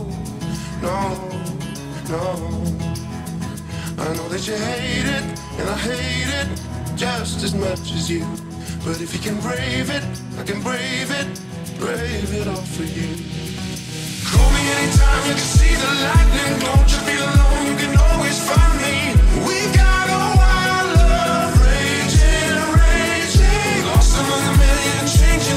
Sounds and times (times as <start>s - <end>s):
Music: 0.0s - 25.5s.